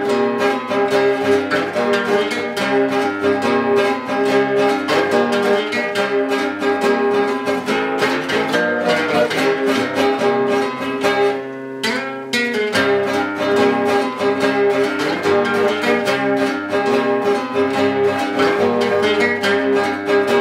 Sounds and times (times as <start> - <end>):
Strum: 0.0 - 20.4.